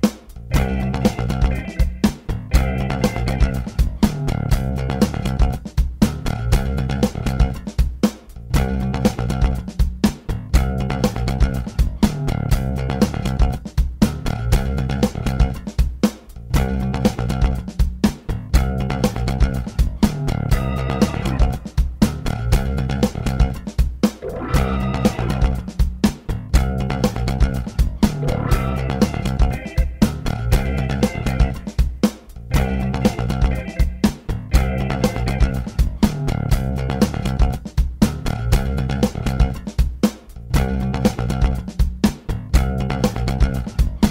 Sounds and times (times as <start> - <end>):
Music: 0.0 - 44.1.